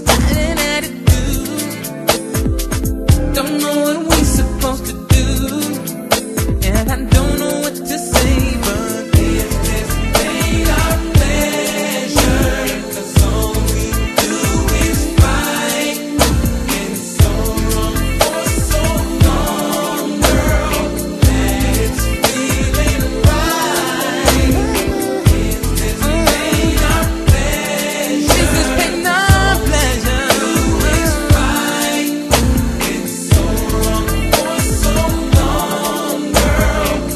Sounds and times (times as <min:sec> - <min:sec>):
Soul music: 0:00.0 - 0:37.1.